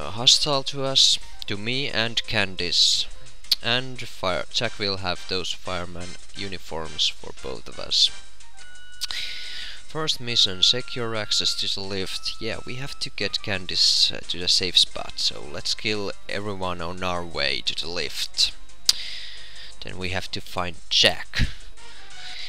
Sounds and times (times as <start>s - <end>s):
Speech: 0.0s - 8.1s, 9.9s - 18.6s, 19.8s - 21.6s
Music: 0.0s - 22.4s.